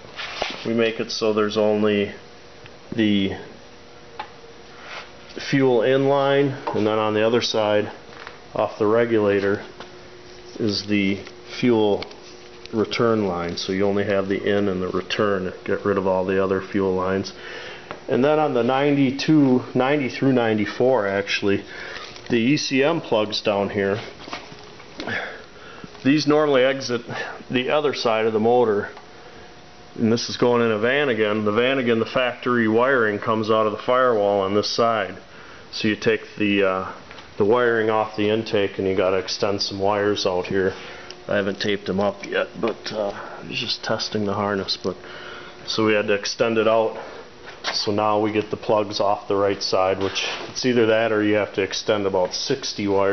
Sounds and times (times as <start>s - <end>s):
Speech: 0.6s - 2.2s, 2.9s - 3.6s, 5.4s - 9.7s, 10.6s - 12.1s, 12.7s - 17.4s, 18.1s - 21.7s, 22.3s - 24.2s, 26.0s - 29.0s, 30.0s - 45.0s, 45.7s - 47.1s, 47.7s - 53.1s.